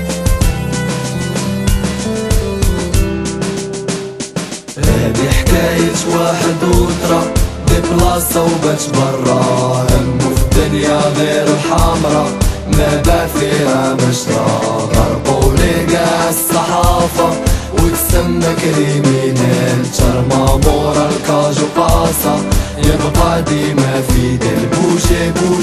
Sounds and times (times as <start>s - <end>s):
Music: 0.0s - 25.6s.